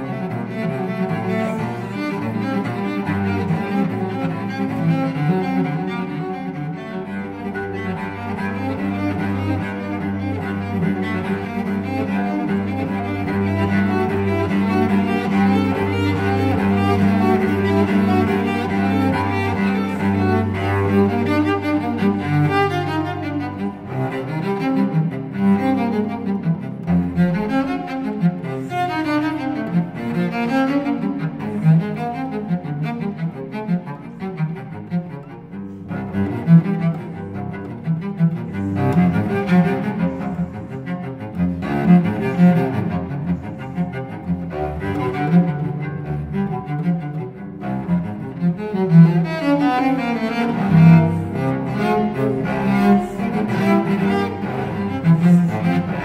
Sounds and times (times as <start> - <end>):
Cello: 0.0 - 56.0.